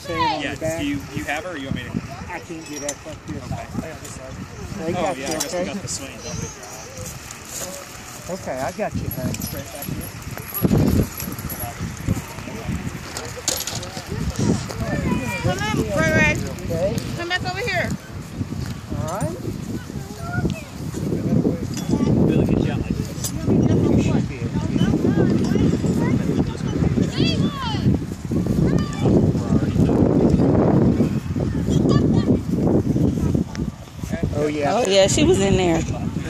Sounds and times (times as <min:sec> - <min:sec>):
Child speech, kid speaking: 0:00.0 - 0:00.7, 0:04.6 - 0:07.2, 0:14.1 - 0:16.5, 0:19.6 - 0:21.1, 0:24.6 - 0:29.8, 0:31.4 - 0:32.6
Outside, rural or natural: 0:00.0 - 0:36.2.